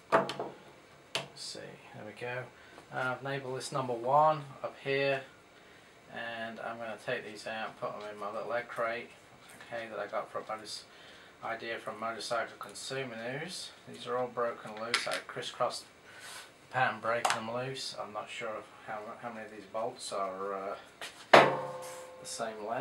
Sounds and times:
Speech: 1.4s - 5.3s, 6.1s - 15.9s, 16.7s - 20.9s, 22.2s - 22.8s.

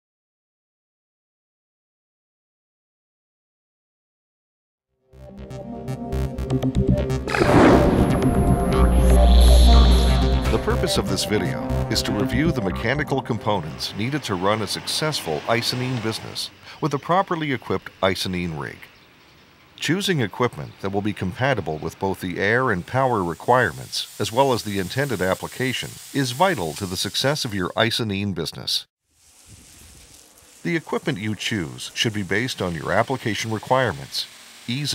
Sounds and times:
Speech: 8.7s - 18.9s, 19.8s - 28.9s, 30.6s - 34.9s
Spray: 22.0s - 27.9s, 29.1s - 34.9s.

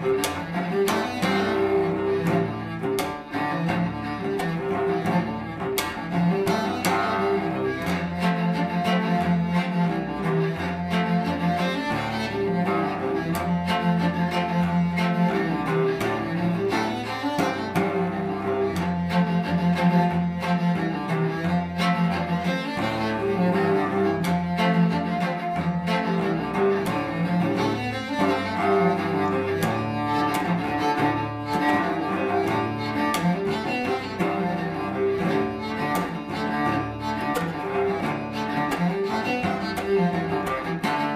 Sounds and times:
Cello: 0.0s - 41.1s.

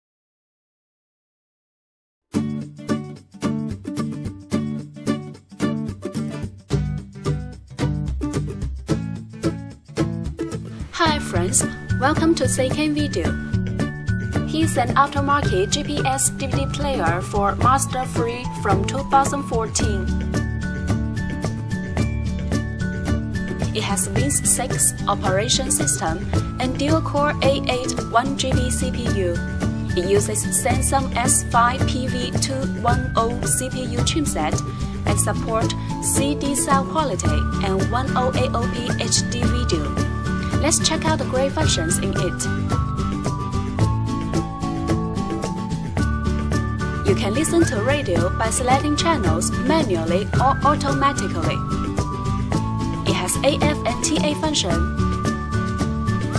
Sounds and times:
Music: 2.3s - 56.3s
Speech: 10.9s - 13.4s, 14.5s - 20.2s, 23.8s - 42.5s, 47.1s - 51.6s, 53.1s - 54.9s.

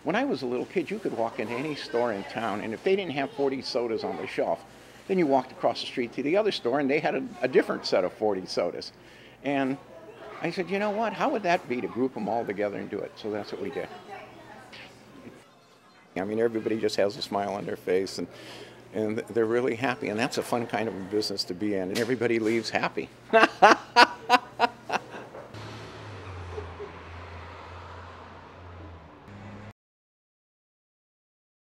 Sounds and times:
Speech: 0.1s - 14.9s, 19.0s - 23.1s.

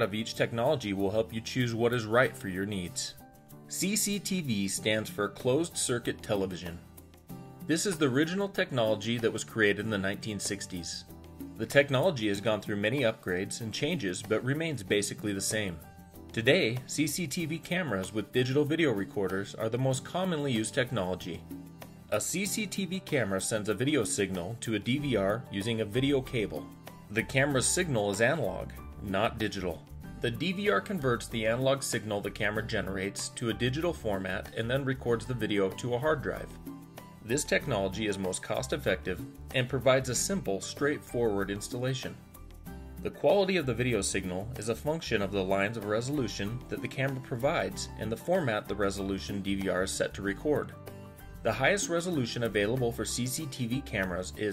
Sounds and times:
Speech: 0.0s - 6.9s, 7.7s - 21.4s, 22.1s - 36.6s, 37.2s - 42.2s, 43.0s - 50.8s, 51.4s - 54.5s
Music: 0.0s - 54.5s.

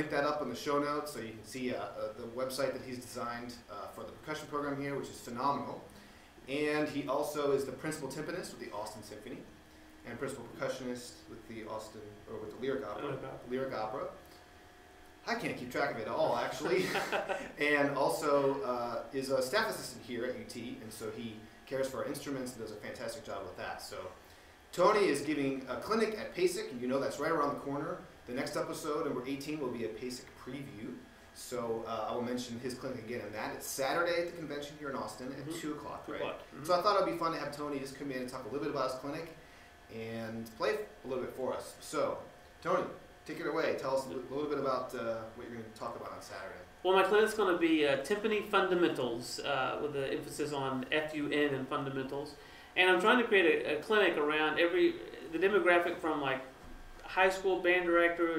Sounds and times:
Speech: 0.0s - 14.2s, 15.2s - 58.3s.

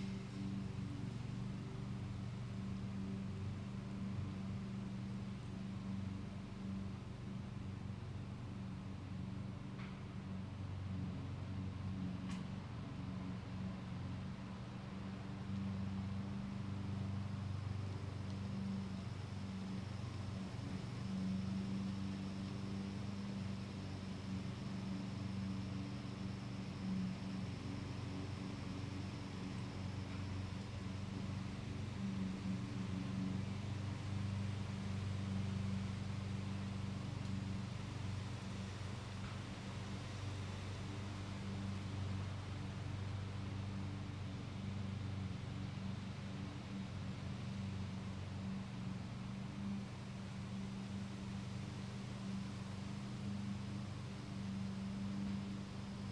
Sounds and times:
Outside, urban or manmade: 0.0s - 56.1s.

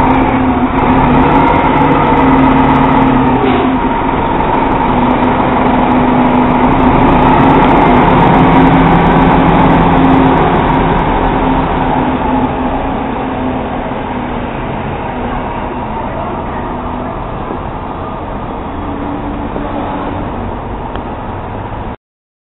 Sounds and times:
Bus: 0.0s - 22.0s
Speech: 15.2s - 18.4s.

